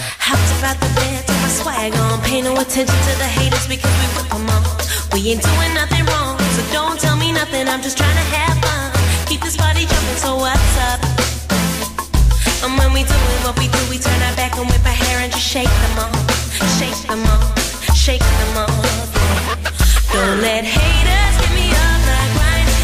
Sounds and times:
Music: 0:00.0 - 0:22.8.

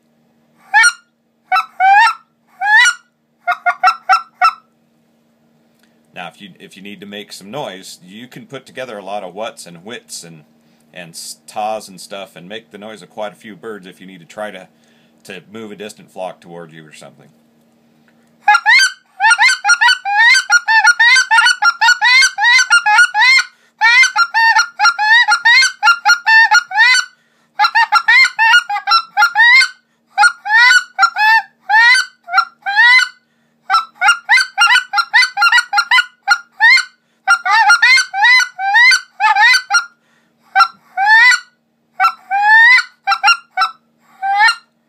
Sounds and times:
Goose: 0:00.7 - 0:04.7, 0:18.5 - 0:44.7
Speech: 0:06.2 - 0:17.4.

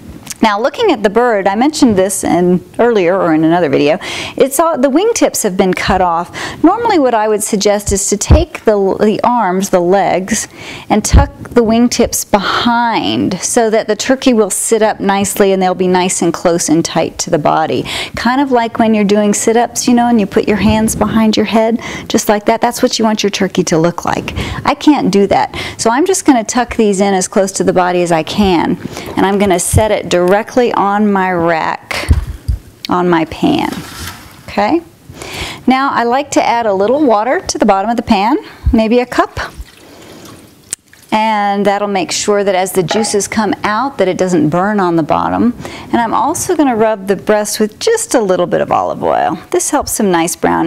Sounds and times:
Speech: 0:00.3 - 0:32.1, 0:32.9 - 0:33.8, 0:34.5 - 0:34.9, 0:35.7 - 0:39.5, 0:41.2 - 0:50.6
Pour: 0:39.4 - 0:41.2.

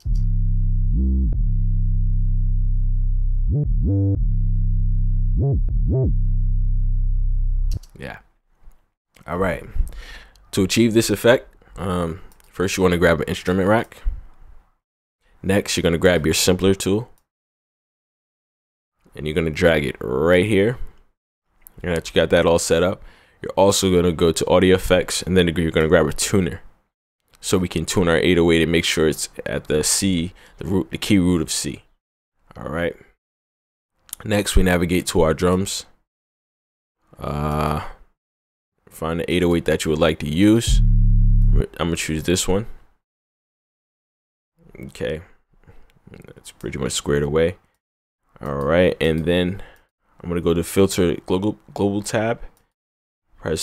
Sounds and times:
Speech: 0:07.8 - 0:08.3, 0:09.2 - 0:09.8, 0:10.5 - 0:14.1, 0:15.4 - 0:17.2, 0:19.1 - 0:20.9, 0:21.8 - 0:26.7, 0:27.4 - 0:31.9, 0:32.5 - 0:33.2, 0:34.1 - 0:36.0, 0:37.2 - 0:38.1, 0:38.9 - 0:40.9, 0:41.5 - 0:42.8, 0:44.6 - 0:45.4, 0:46.1 - 0:47.6, 0:48.4 - 0:52.6, 0:53.4 - 0:53.6.

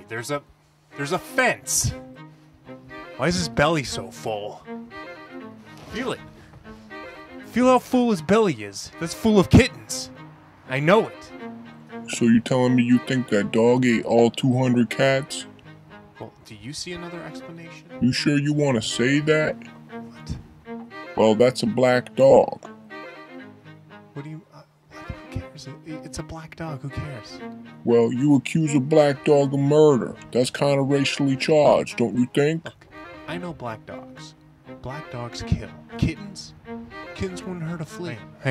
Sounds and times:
Speech: 0:00.0 - 0:00.4, 0:01.0 - 0:02.0, 0:03.2 - 0:04.6, 0:05.9 - 0:06.2, 0:07.5 - 0:10.1, 0:10.7 - 0:11.3, 0:12.1 - 0:15.5, 0:16.2 - 0:20.4, 0:21.2 - 0:22.7, 0:24.2 - 0:36.5, 0:37.1 - 0:38.5
Music: 0:00.0 - 0:38.5.

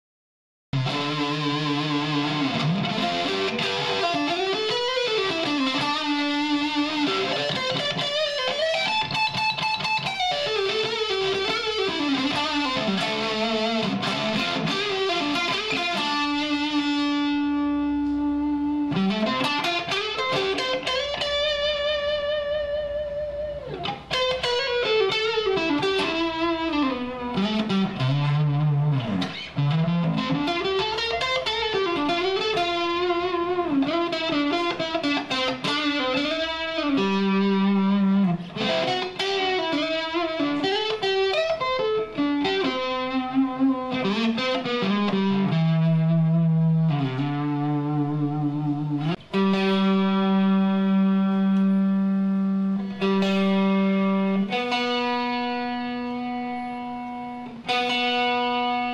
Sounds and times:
Electric guitar: 0:00.8 - 0:58.9.

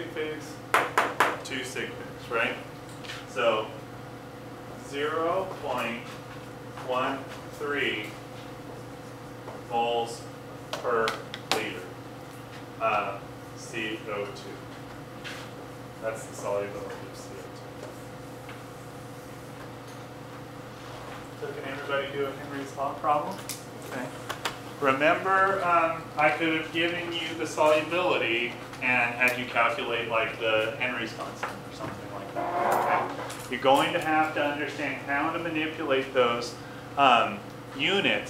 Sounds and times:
Speech: 0:00.0 - 0:00.6, 0:01.4 - 0:02.7, 0:03.3 - 0:03.8, 0:04.8 - 0:06.2, 0:06.8 - 0:08.2, 0:09.7 - 0:12.0, 0:12.8 - 0:14.7, 0:16.0 - 0:17.6, 0:21.4 - 0:24.2, 0:24.8 - 0:32.4, 0:33.5 - 0:38.2.

